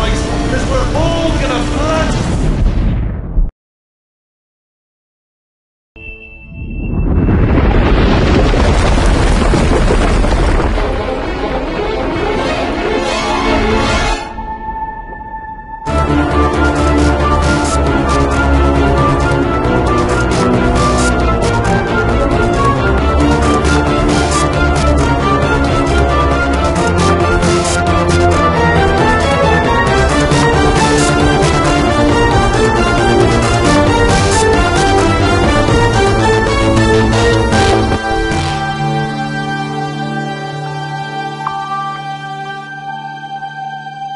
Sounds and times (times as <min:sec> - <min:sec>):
Music: 0:00.0 - 0:02.7, 0:06.0 - 0:07.3, 0:10.4 - 0:44.1.